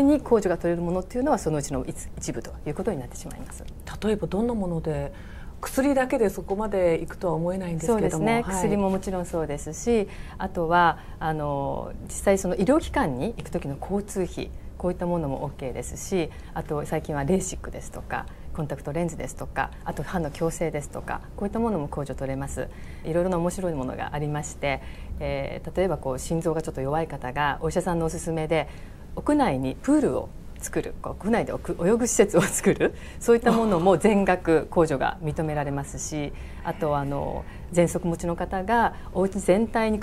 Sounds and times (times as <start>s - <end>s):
Speech: 0.0s - 40.0s.